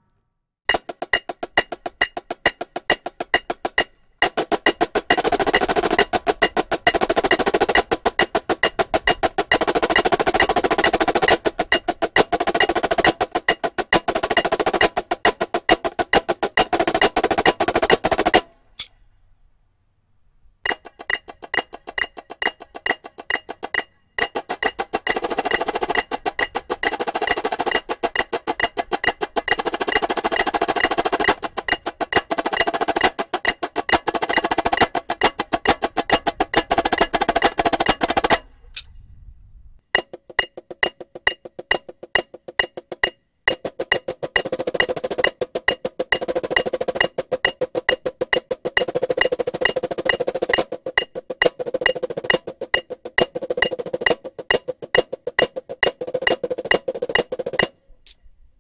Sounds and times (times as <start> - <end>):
Drum: 0.7 - 18.5, 20.7 - 38.5, 40.0 - 57.8.